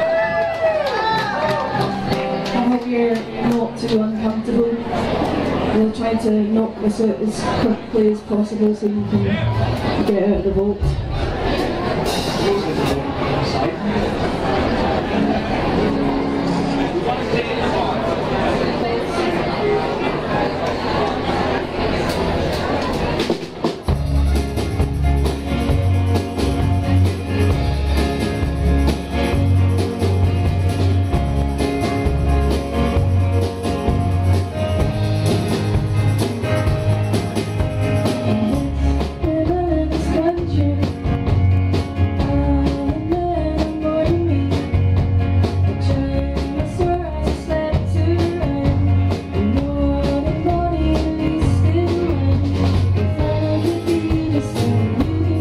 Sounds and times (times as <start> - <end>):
Bluegrass: 0.0 - 55.4.